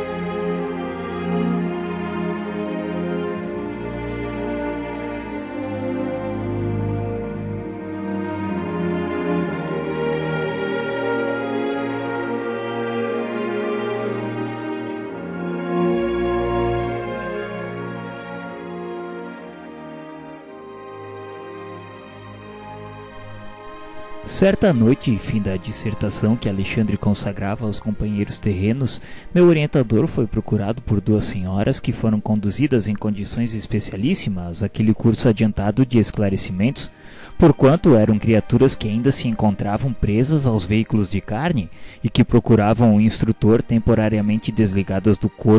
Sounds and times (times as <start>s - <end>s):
Music: 0.0s - 45.5s.